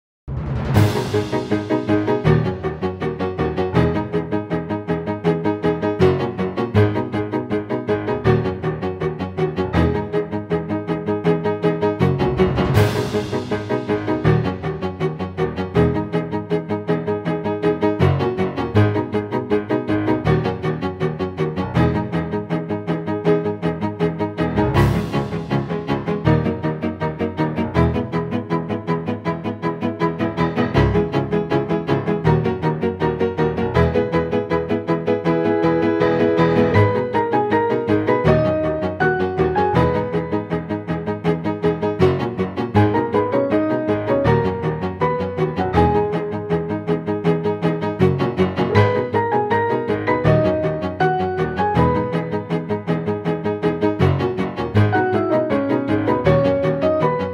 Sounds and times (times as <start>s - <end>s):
Theme music: 0.3s - 57.3s.